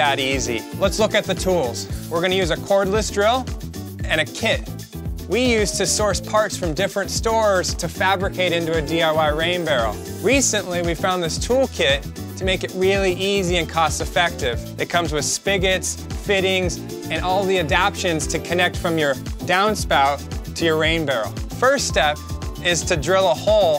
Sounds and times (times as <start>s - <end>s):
Music: 0.0s - 23.7s
Speech: 0.0s - 23.7s.